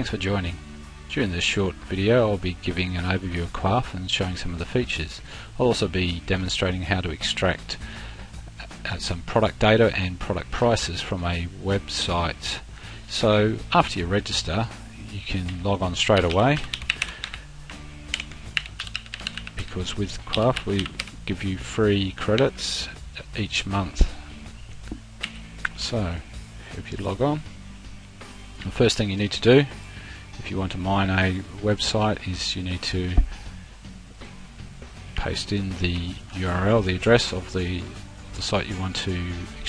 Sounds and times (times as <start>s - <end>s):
Speech: 0.0s - 7.8s, 8.6s - 16.7s, 19.6s - 24.2s, 25.8s - 27.5s, 28.6s - 29.8s, 30.4s - 33.3s, 35.2s - 39.6s
Music: 0.0s - 39.6s.